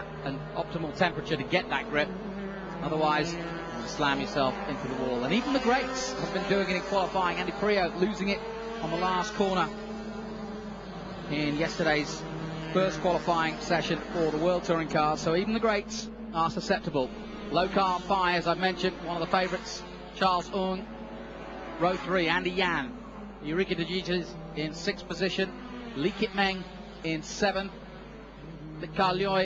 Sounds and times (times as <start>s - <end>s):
Speech: 0.0s - 2.1s, 2.8s - 9.7s, 11.3s - 12.2s, 12.8s - 20.9s, 21.8s - 27.8s, 28.8s - 29.4s
Car: 0.0s - 29.4s.